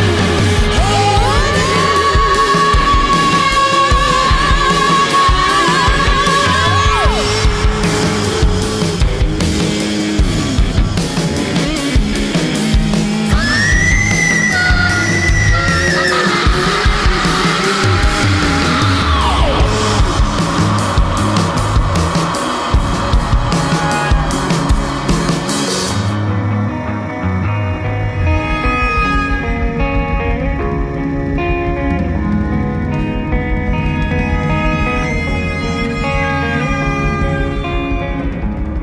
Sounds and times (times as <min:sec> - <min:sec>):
Music: 0:00.0 - 0:38.8.